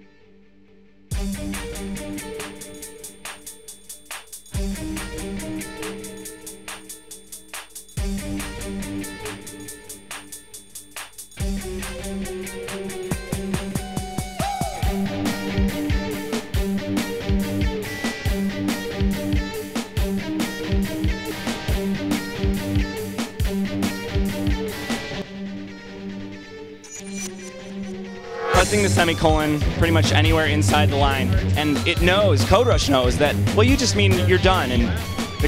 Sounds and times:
Music: 0.0 - 35.4
Speech: 28.6 - 35.4.

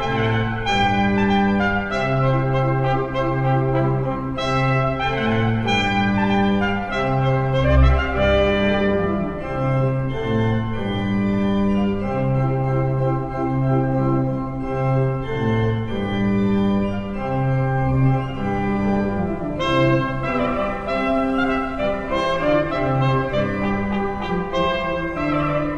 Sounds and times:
Piano: 0.0 - 25.7.

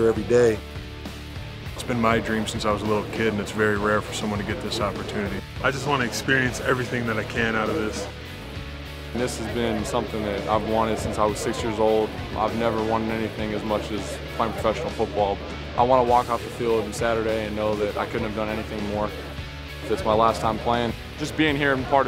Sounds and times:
Speech: 0.0 - 0.6, 1.8 - 8.1, 9.2 - 19.2, 19.8 - 22.0
Music: 0.0 - 22.0.

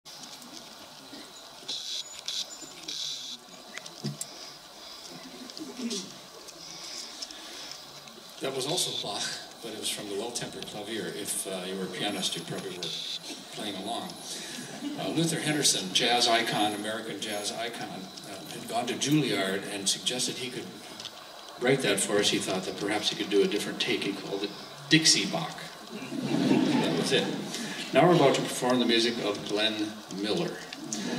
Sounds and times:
Speech: 8.4 - 14.2, 14.8 - 20.8, 21.6 - 25.8, 26.8 - 31.1.

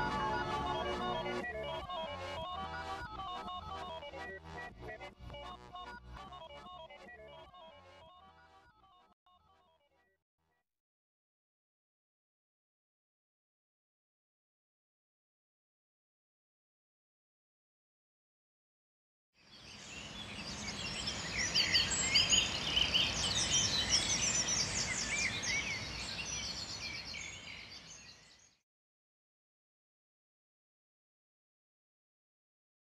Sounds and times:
Environmental noise: 19.5 - 28.3.

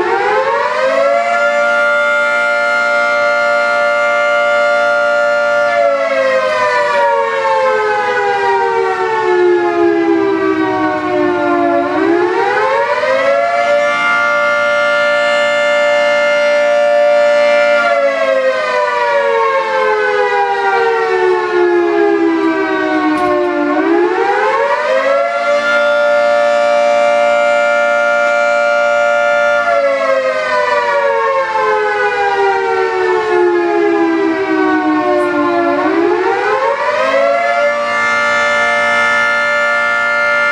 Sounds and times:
Civil defense siren: 0.0 - 40.5.

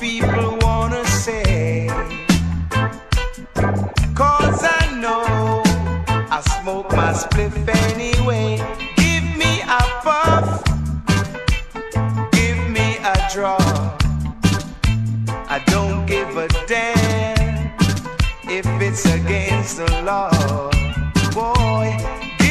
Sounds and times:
Reggae: 0.0 - 22.5.

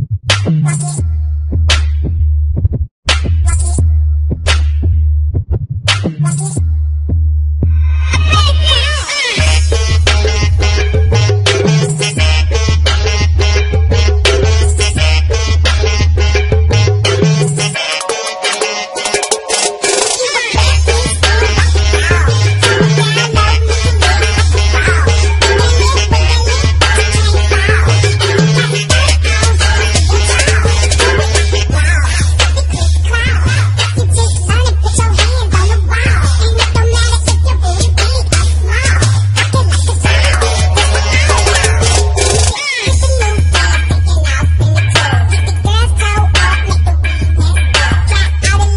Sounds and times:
Music: 0.0 - 48.7.

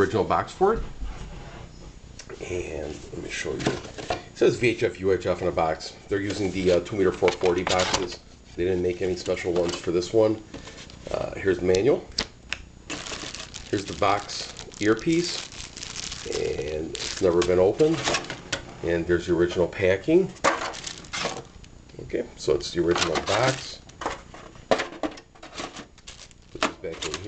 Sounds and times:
Speech: 0.0 - 0.9, 2.3 - 3.8, 4.4 - 10.4, 11.1 - 12.1, 13.7 - 15.5, 16.2 - 18.0, 18.8 - 20.4, 21.9 - 23.8, 26.6 - 27.2.

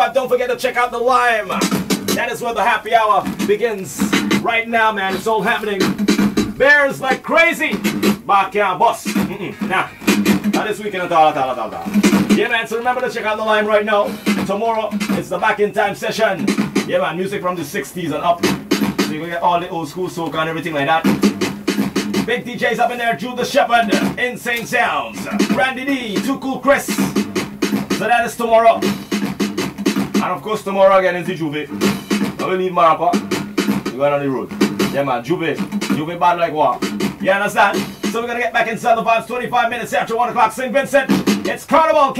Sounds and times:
Music: 0.0 - 42.1.

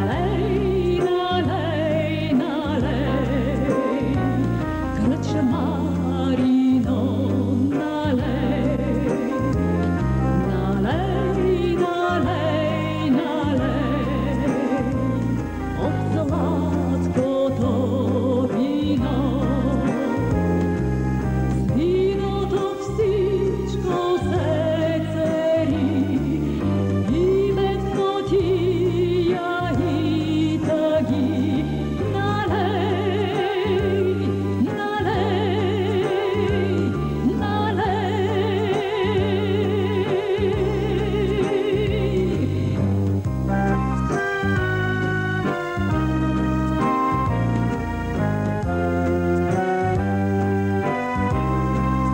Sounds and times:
Music: 0.0 - 52.1.

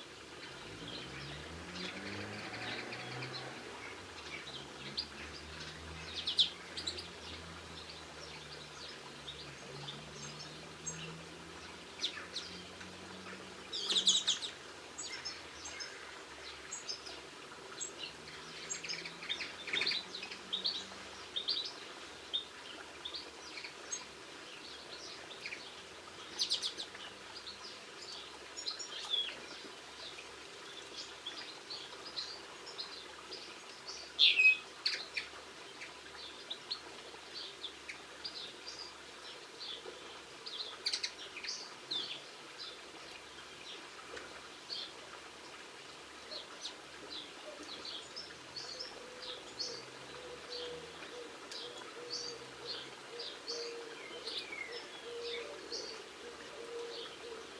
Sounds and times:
Chirp, tweet: 0.7 - 17.2, 17.8 - 36.8, 46.3 - 57.5.

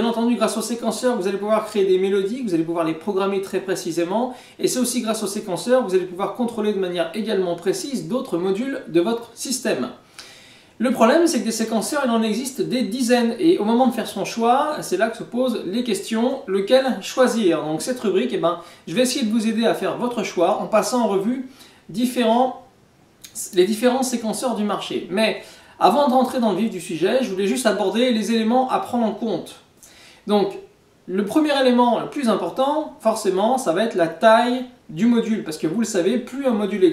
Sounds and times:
Speech: 0.0 - 10.0, 10.8 - 29.7, 30.3 - 36.9.

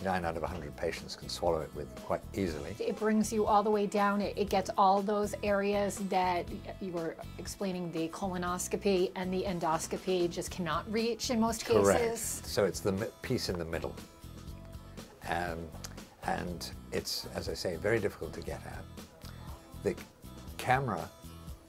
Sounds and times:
Music: 0.0 - 21.6
Speech: 11.4 - 14.0.

